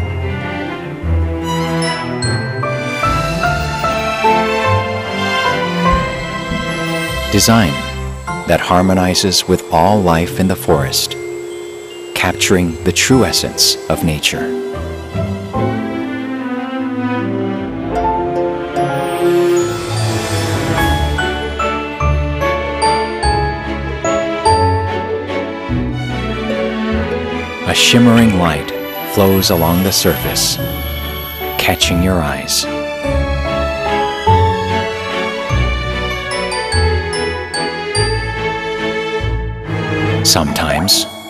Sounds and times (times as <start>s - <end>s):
Marimba, xylophone: 0.0s - 16.0s, 18.0s - 25.2s, 26.2s - 39.4s, 40.3s - 41.2s
Glockenspiel: 0.0s - 16.4s, 17.9s - 41.2s.